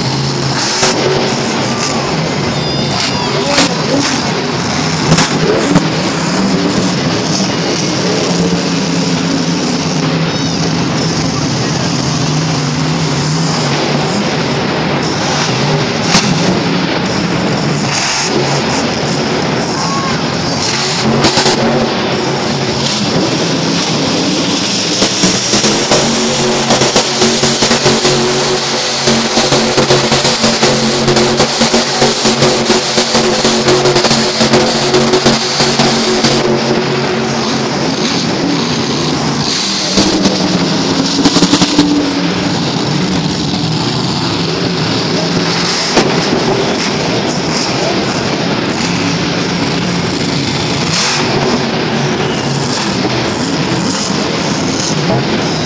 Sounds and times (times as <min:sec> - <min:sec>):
Truck: 0:00.0 - 0:55.6.